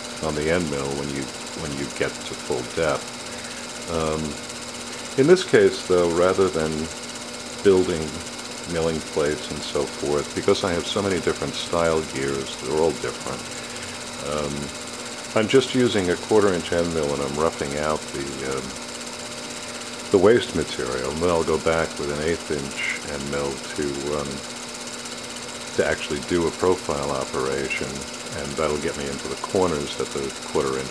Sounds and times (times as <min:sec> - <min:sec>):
Speech: 0:00.2 - 0:03.0, 0:03.9 - 0:04.4, 0:05.2 - 0:06.9, 0:07.6 - 0:13.4, 0:14.2 - 0:14.7, 0:15.4 - 0:18.8, 0:20.1 - 0:24.4, 0:25.8 - 0:30.9.